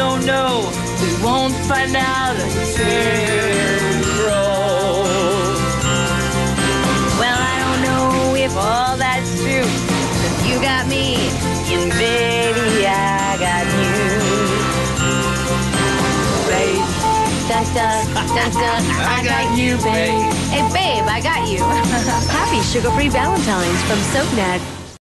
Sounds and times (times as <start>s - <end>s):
Music: 0.0s - 25.0s
Speech: 18.2s - 24.6s.